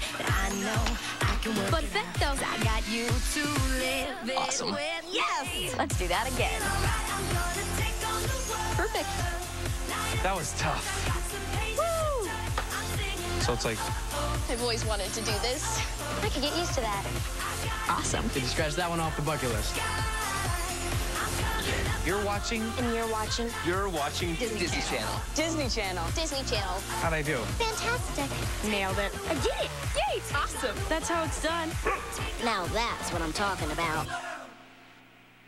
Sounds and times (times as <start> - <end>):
Music: 0.0 - 35.4
Speech: 4.3 - 6.2.